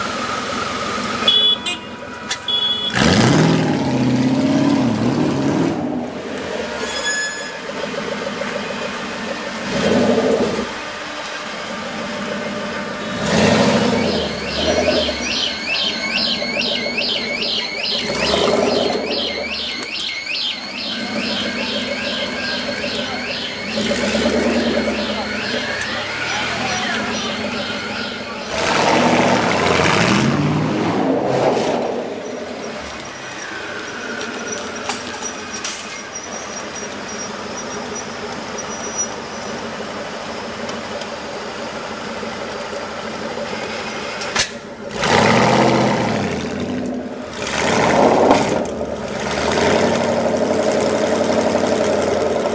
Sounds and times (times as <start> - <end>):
Outside, urban or manmade: 0.0 - 52.5
Speech: 24.8 - 27.5.